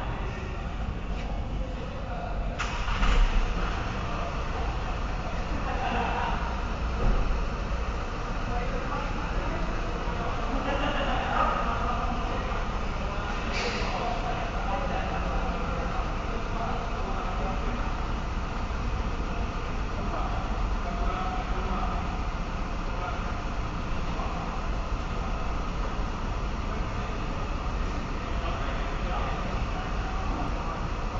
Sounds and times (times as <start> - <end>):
Speech: 0.0 - 7.2, 8.2 - 31.1.